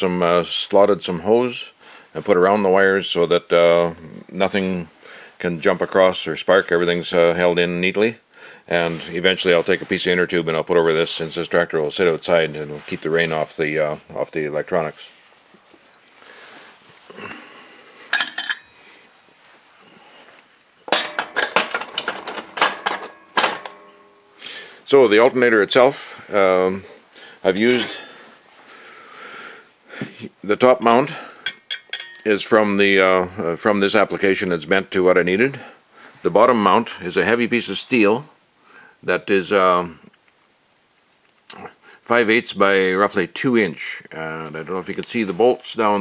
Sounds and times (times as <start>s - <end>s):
Speech: 0.0s - 15.2s, 24.9s - 28.1s, 30.0s - 31.3s, 32.2s - 38.4s, 39.0s - 40.1s, 41.5s - 46.0s.